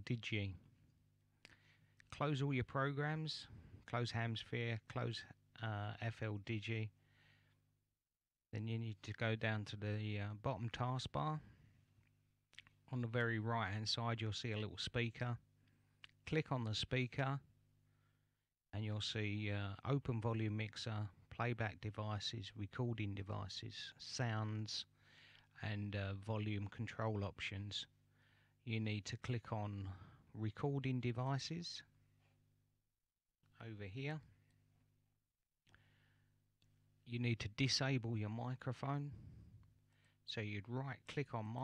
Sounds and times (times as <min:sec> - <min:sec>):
Speech: 0:00.0 - 0:00.7, 0:02.1 - 0:07.0, 0:08.5 - 0:11.6, 0:12.6 - 0:15.4, 0:16.2 - 0:17.5, 0:18.7 - 0:24.9, 0:25.6 - 0:28.0, 0:28.6 - 0:32.0, 0:33.5 - 0:34.4, 0:37.0 - 0:39.3, 0:40.3 - 0:41.6.